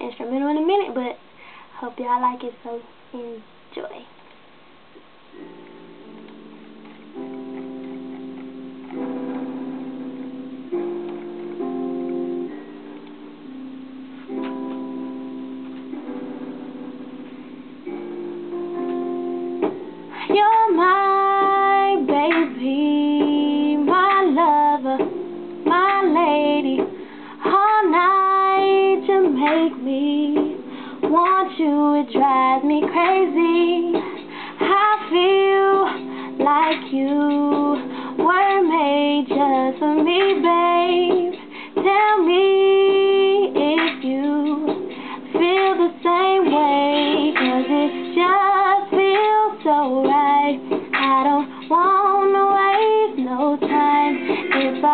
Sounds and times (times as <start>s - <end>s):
Music: 5.3s - 54.9s
Female singing: 20.2s - 25.1s, 25.7s - 54.9s.